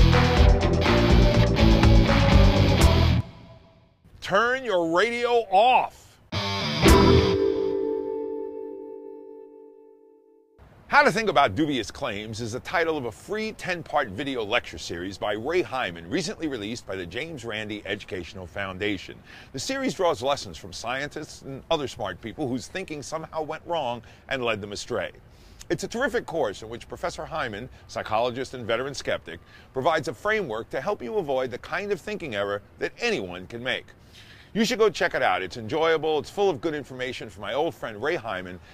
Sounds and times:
Speech: 4.2s - 6.2s, 10.9s - 33.9s, 34.6s - 38.6s.

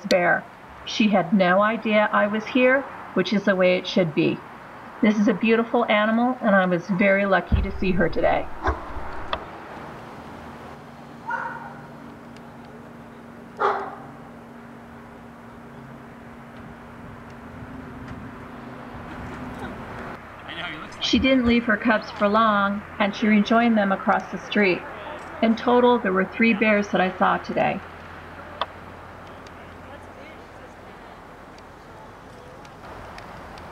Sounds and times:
Speech: 0.0s - 4.4s, 5.0s - 8.5s, 20.4s - 27.8s, 29.3s - 32.7s.

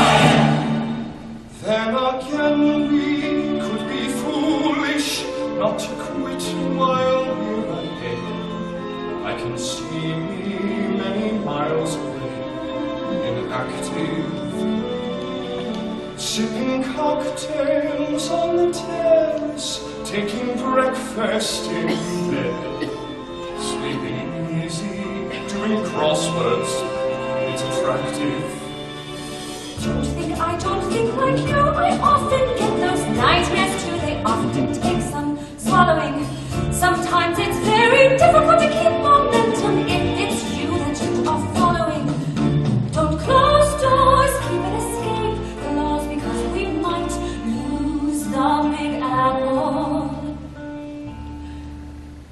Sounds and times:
Opera: 0.0s - 52.3s.

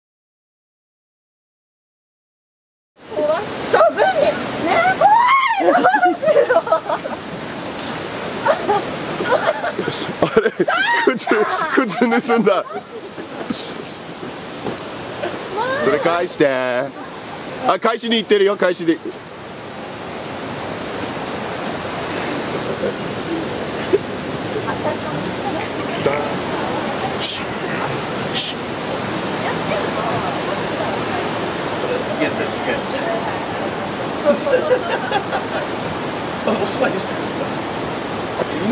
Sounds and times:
Outside, rural or natural: 3.0s - 38.7s
Pink noise: 3.0s - 38.7s.

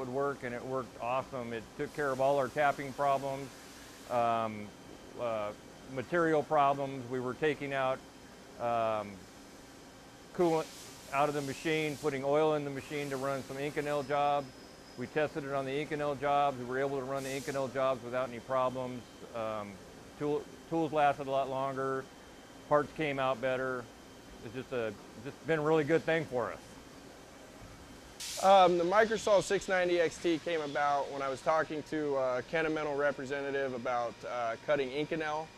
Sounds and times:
Speech: 0.0s - 3.5s, 4.1s - 8.0s, 8.6s - 9.2s, 10.4s - 22.1s, 22.7s - 26.6s, 28.4s - 35.5s.

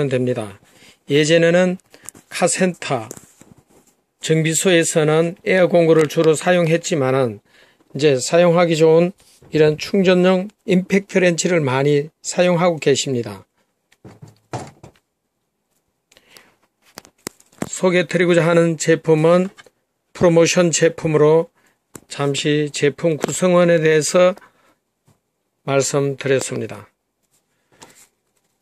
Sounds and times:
Speech: 0.0s - 3.2s, 4.2s - 13.5s, 17.6s - 24.4s, 25.6s - 27.0s.

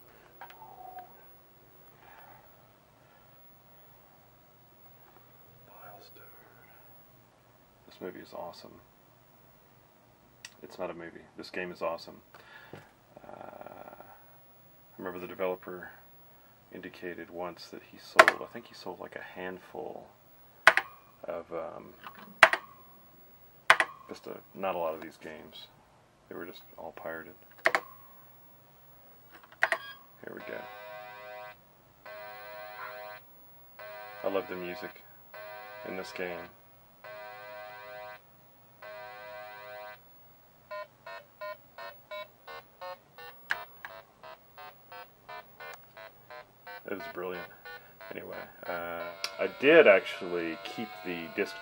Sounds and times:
Inside, small room: 0.0s - 51.6s
Speech: 7.9s - 8.8s, 10.6s - 12.2s, 15.0s - 16.0s, 16.7s - 20.1s, 21.2s - 22.0s, 24.1s - 27.4s, 30.2s - 30.7s, 34.2s - 35.0s, 35.8s - 36.6s, 46.9s - 47.5s, 48.1s - 51.6s.

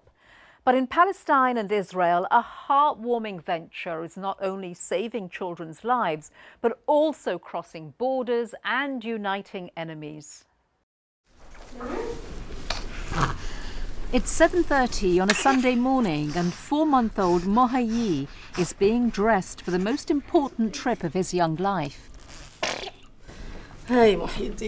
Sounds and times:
Speech: 14.2s - 22.0s, 23.9s - 24.6s.

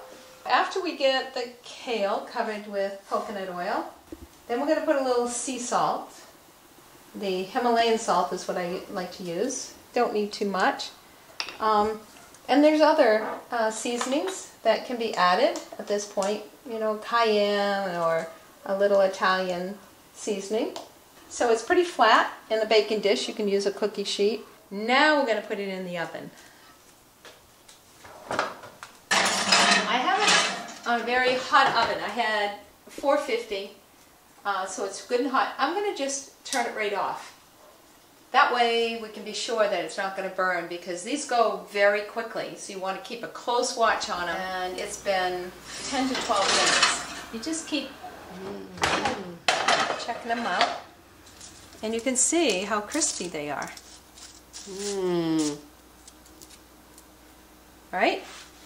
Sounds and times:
Inside, small room: 0.0s - 58.6s
Speech: 0.5s - 6.3s, 7.2s - 11.0s, 11.6s - 26.4s, 29.8s - 33.8s, 34.4s - 37.4s, 38.4s - 49.4s, 51.8s - 53.8s, 54.7s - 55.7s, 57.9s - 58.3s.

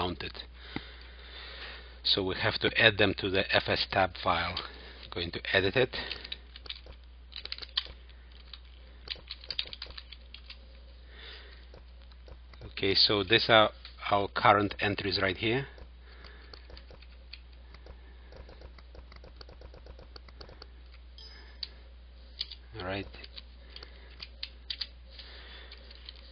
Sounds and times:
Typing: 9.0s - 10.6s.

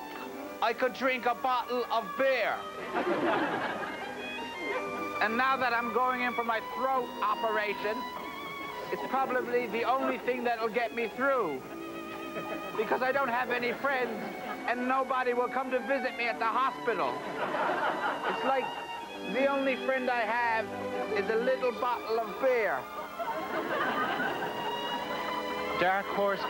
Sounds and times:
Music: 0.0s - 26.4s
Speech: 0.6s - 2.6s, 5.2s - 8.0s, 8.9s - 11.6s, 12.8s - 17.2s, 18.3s - 18.7s, 19.3s - 20.6s, 21.2s - 22.8s, 25.8s - 26.4s.

